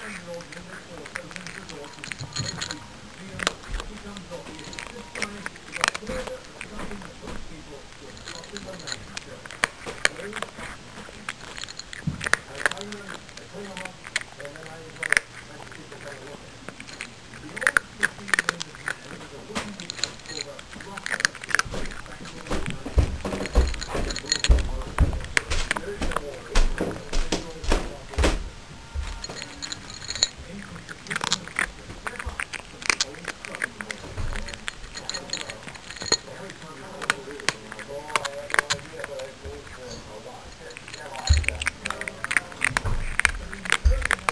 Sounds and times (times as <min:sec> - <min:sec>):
Speech: 0:00.0 - 0:11.8, 0:12.4 - 0:44.3.